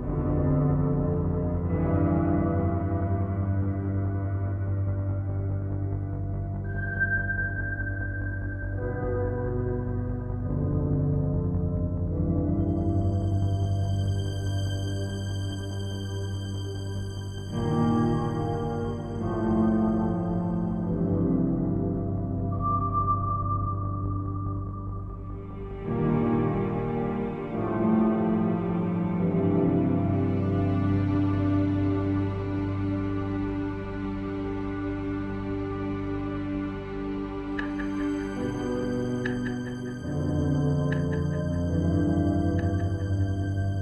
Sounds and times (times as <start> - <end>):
Background music: 0.0 - 43.8.